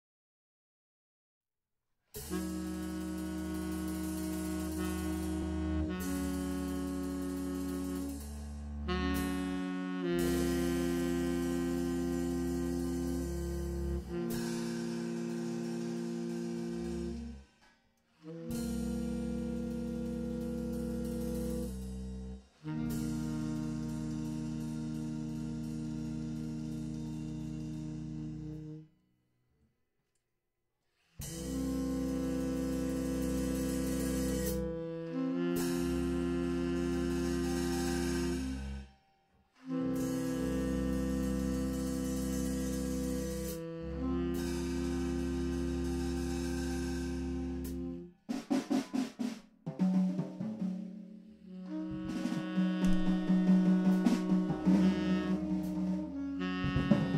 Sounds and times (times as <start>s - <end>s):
Wind instrument, woodwind instrument: 2.2s - 28.9s, 31.2s - 48.2s, 51.4s - 57.1s.